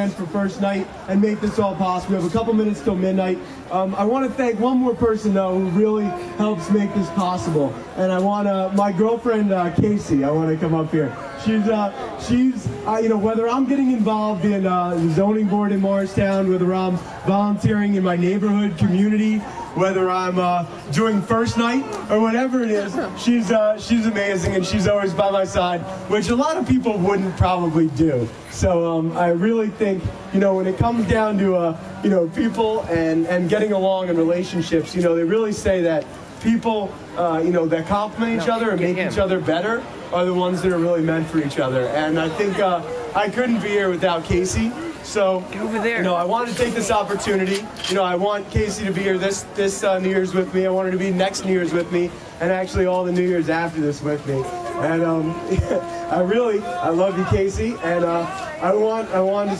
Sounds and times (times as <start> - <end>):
Crowd: 0.0 - 59.5
Speech: 0.0 - 59.5.